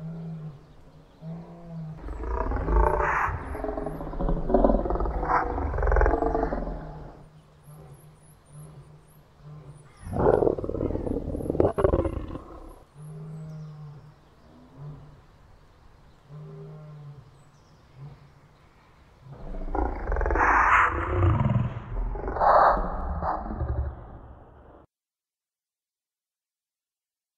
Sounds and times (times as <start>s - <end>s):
Roar: 0.0s - 15.3s, 16.2s - 18.6s, 19.2s - 24.9s.